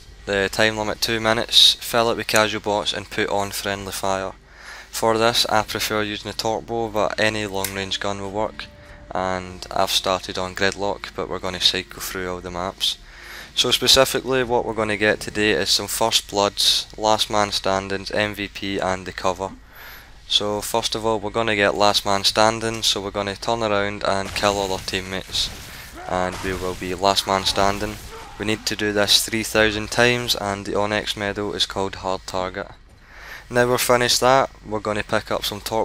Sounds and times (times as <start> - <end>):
Speech: 0.3 - 19.6, 20.3 - 32.8, 33.4 - 35.8.